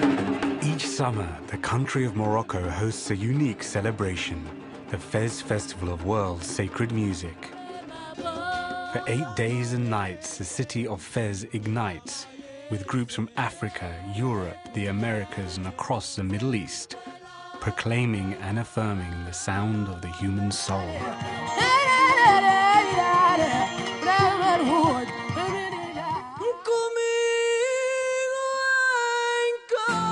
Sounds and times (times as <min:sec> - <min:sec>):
Music: 0:00.0 - 0:30.1
Speech: 0:00.6 - 0:07.5, 0:09.0 - 0:17.0, 0:17.6 - 0:21.1.